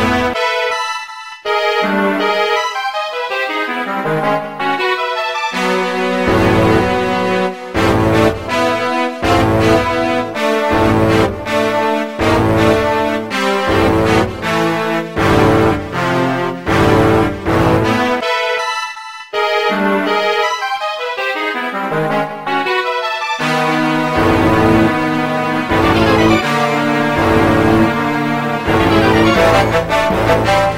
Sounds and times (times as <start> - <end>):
Video game music: 0.0 - 30.7.